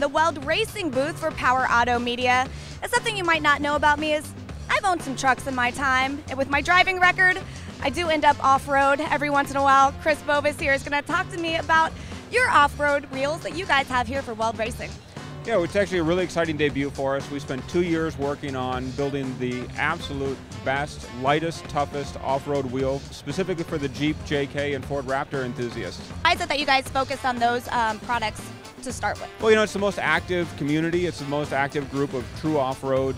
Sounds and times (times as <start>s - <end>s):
Speech: 0.0s - 14.9s, 15.5s - 33.1s
Music: 0.0s - 33.1s.